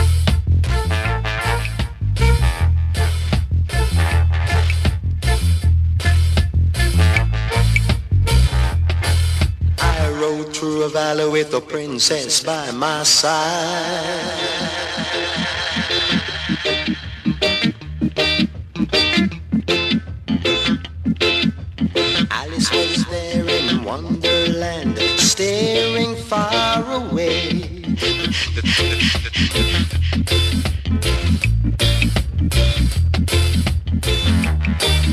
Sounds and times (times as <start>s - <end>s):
Music: 0.0s - 10.6s, 14.3s - 35.1s.